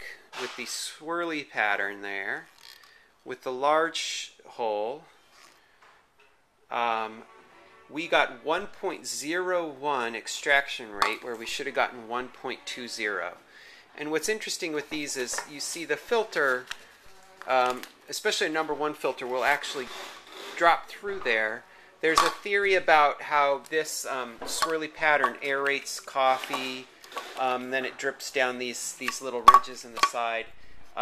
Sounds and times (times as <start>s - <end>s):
Speech: 0.0s - 2.5s, 3.3s - 5.1s, 6.7s - 7.3s, 7.9s - 13.4s, 14.0s - 16.7s, 17.4s - 20.0s, 20.6s - 31.0s.